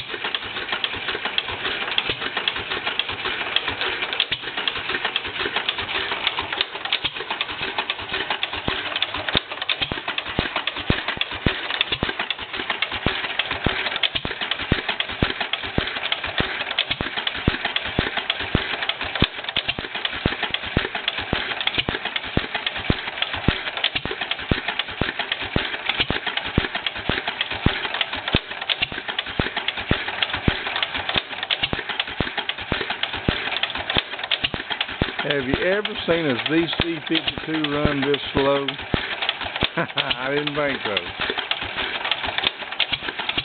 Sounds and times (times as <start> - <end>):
Idling: 0.0 - 43.4
Medium engine (mid frequency): 0.0 - 43.4.